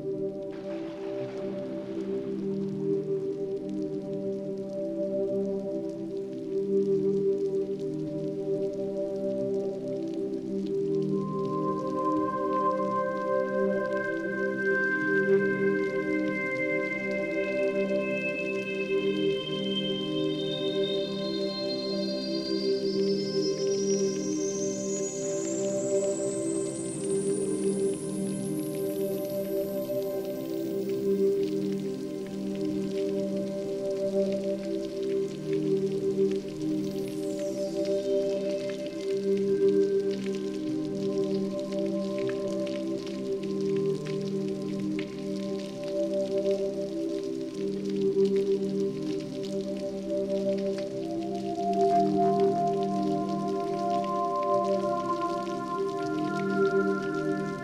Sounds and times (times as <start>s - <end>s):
Music: 0.0s - 57.6s.